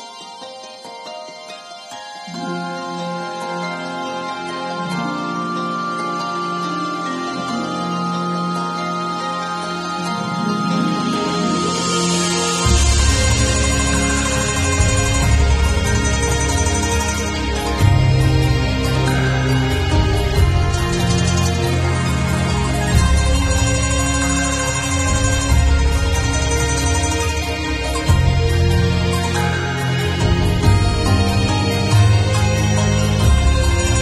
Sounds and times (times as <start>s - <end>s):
Music: 0.0s - 34.0s.